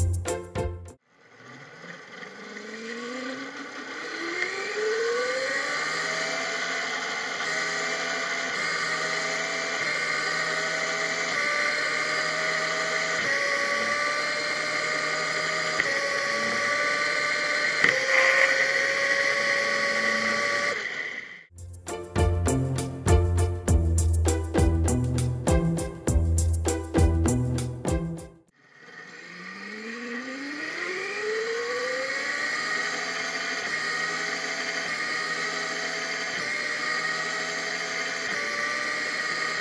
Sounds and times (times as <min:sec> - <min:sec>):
Bicycle: 0:01.0 - 0:21.5, 0:28.5 - 0:39.6.